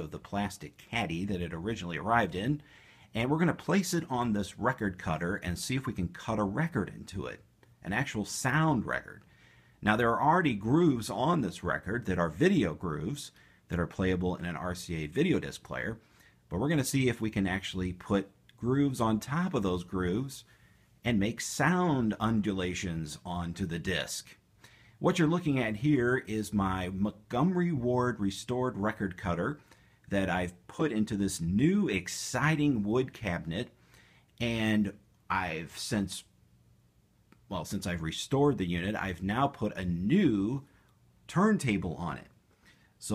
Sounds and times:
Speech: 0.0 - 24.4, 25.0 - 33.8, 34.4 - 36.4, 37.5 - 40.7, 41.3 - 42.4.

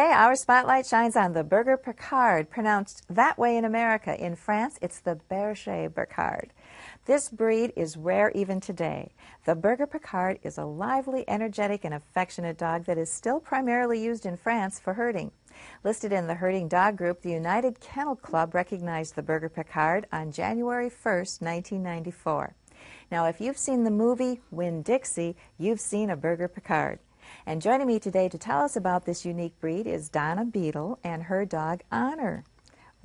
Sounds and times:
Speech: 0.0 - 32.5.

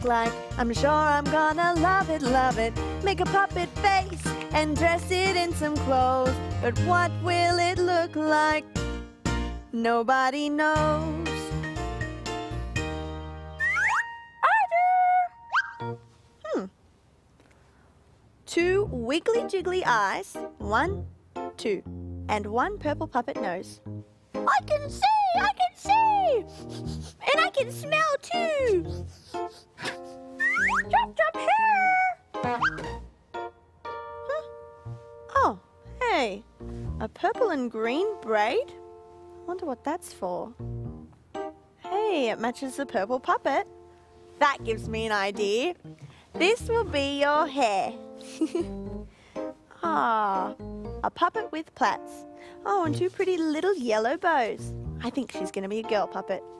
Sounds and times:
Music: 0.0 - 16.4, 18.5 - 56.5
Speech: 18.5 - 21.0, 21.6 - 23.8, 24.5 - 26.4, 27.2 - 28.9, 30.9 - 32.2, 35.3 - 36.4, 41.9 - 43.7, 44.4 - 45.8, 46.4 - 48.0, 49.8 - 56.4.

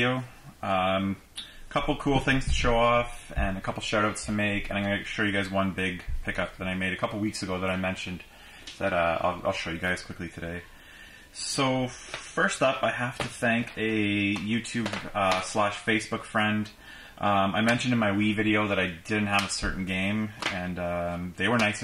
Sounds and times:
Speech: 0.0 - 10.7, 11.4 - 21.8.

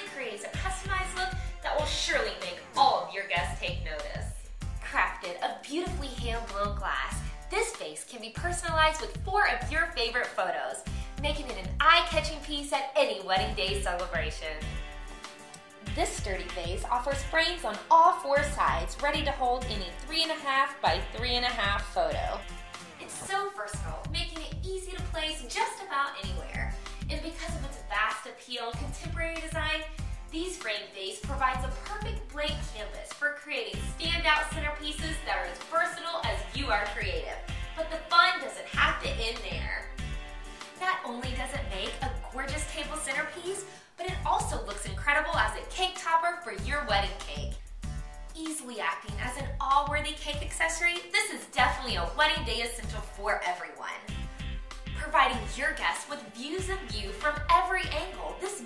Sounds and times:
Speech: 0.0 - 14.7, 15.8 - 22.4, 23.0 - 39.9, 40.8 - 47.6, 48.4 - 54.1, 54.9 - 58.6
Music: 0.0 - 58.6.

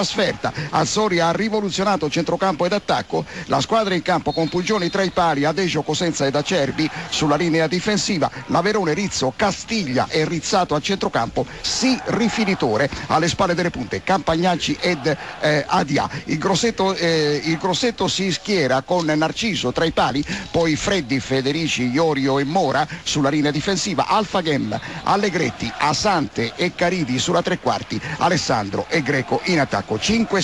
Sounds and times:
Speech: 0.0 - 30.4.

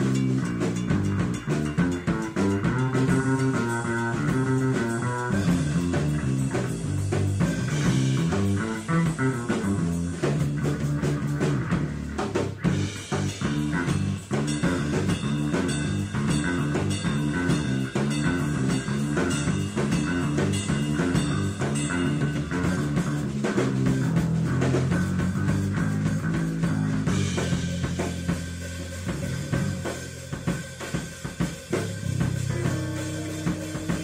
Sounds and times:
Psychedelic rock: 0.0 - 34.0.

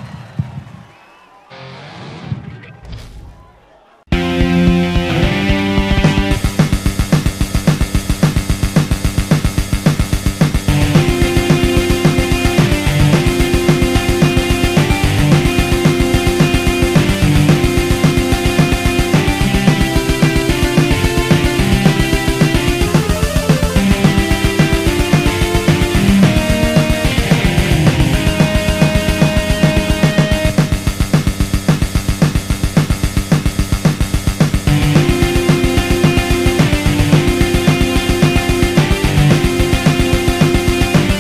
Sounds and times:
Electric guitar: 4.1 - 41.2.

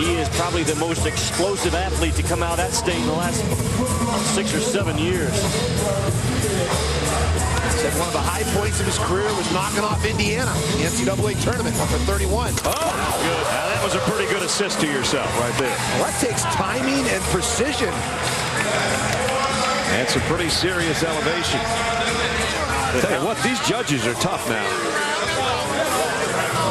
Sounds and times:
Music: 0.0 - 26.7
Speech: 4.2 - 5.4, 7.8 - 12.6, 13.2 - 18.0, 19.8 - 21.7, 22.8 - 26.7.

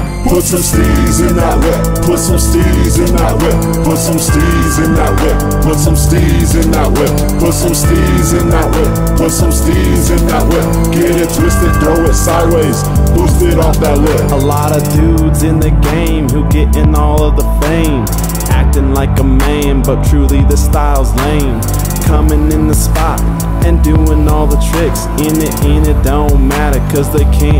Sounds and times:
Music: 0.0 - 27.5.

